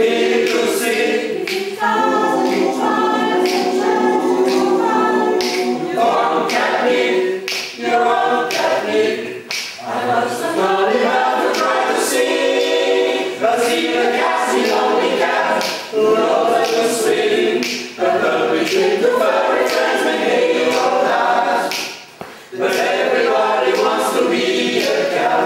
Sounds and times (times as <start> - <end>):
Choir: 0.0 - 25.4.